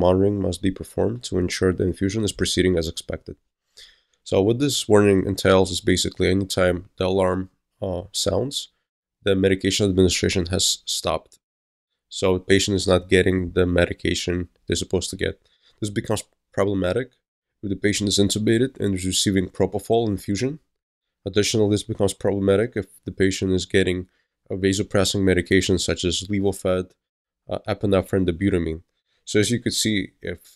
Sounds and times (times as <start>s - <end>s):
Speech: 0.0s - 3.4s, 4.3s - 11.4s, 12.1s - 20.7s, 21.3s - 30.5s.